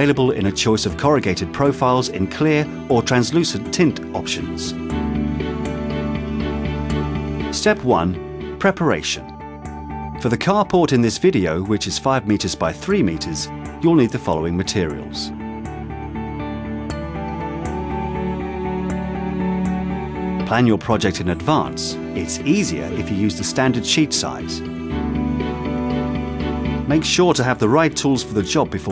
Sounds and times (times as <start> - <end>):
Speech: 0.0 - 4.8, 7.5 - 9.3, 10.2 - 15.4, 20.4 - 24.7, 26.9 - 28.9
Music: 0.0 - 28.9.